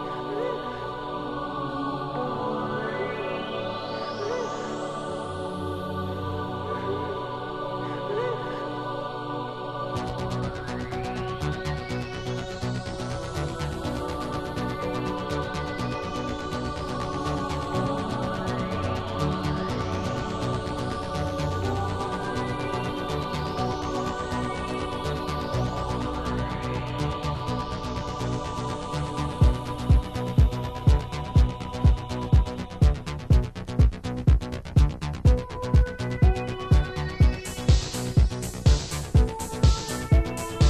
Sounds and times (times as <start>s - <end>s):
Techno: 0.0s - 40.6s.